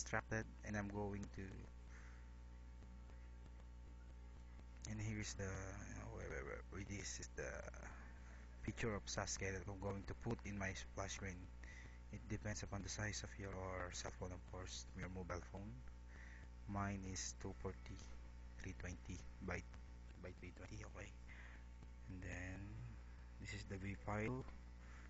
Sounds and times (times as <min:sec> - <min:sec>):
Speech: 0:00.0 - 0:01.7, 0:04.8 - 0:11.5, 0:12.1 - 0:15.8, 0:16.7 - 0:21.2, 0:22.1 - 0:24.6.